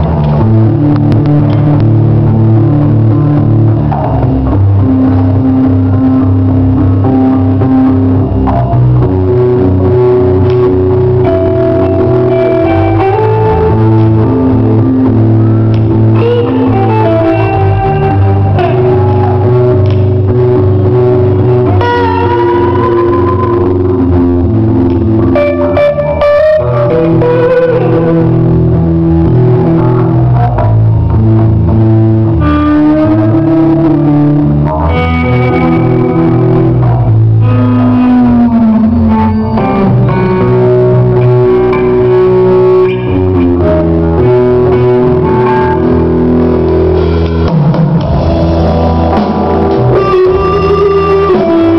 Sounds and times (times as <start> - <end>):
Music: 0.0 - 51.7.